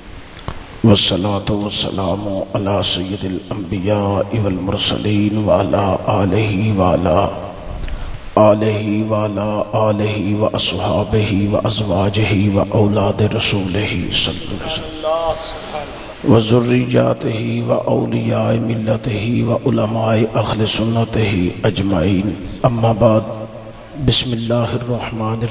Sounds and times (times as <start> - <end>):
Speech: 0.8 - 7.4, 8.4 - 23.4, 24.0 - 25.5.